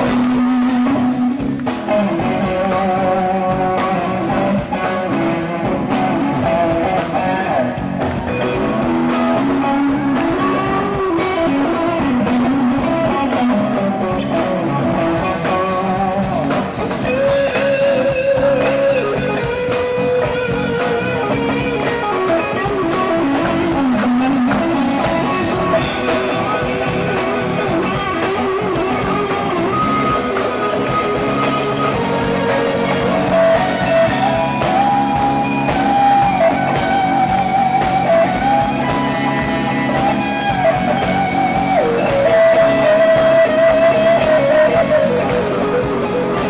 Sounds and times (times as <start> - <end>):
Electric guitar: 0.0 - 46.4.